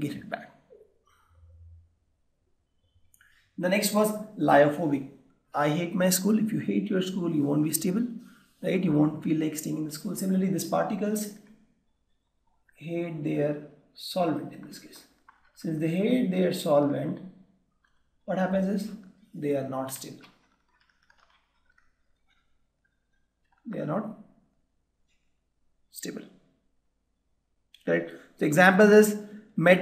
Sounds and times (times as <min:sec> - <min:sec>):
Speech: 0:00.0 - 0:00.5, 0:03.6 - 0:05.0, 0:05.6 - 0:11.4, 0:12.8 - 0:17.2, 0:18.3 - 0:20.3, 0:23.7 - 0:24.2, 0:25.9 - 0:26.3, 0:27.8 - 0:29.8.